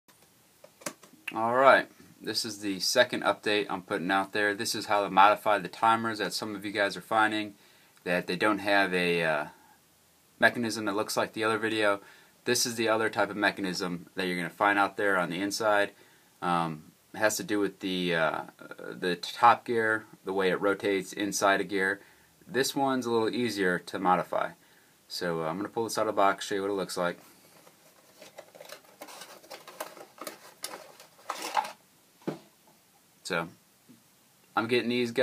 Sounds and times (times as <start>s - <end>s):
Speech: 1.3s - 9.6s, 10.4s - 27.2s, 33.2s - 33.6s, 34.6s - 35.2s.